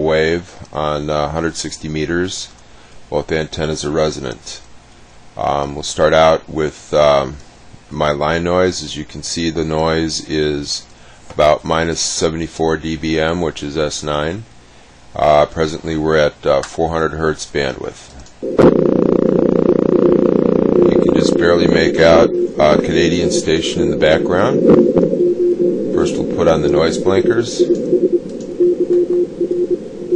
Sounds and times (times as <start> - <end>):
Speech: 0.0 - 4.7, 5.4 - 14.5, 15.2 - 18.2, 20.9 - 24.6, 26.0 - 27.7.